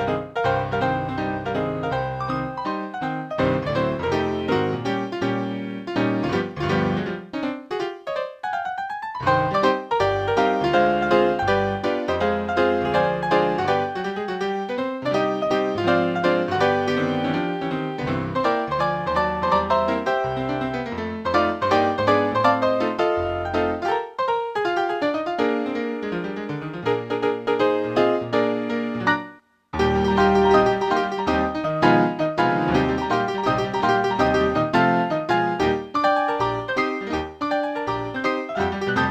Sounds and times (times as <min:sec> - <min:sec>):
Music: 0:00.0 - 0:39.1.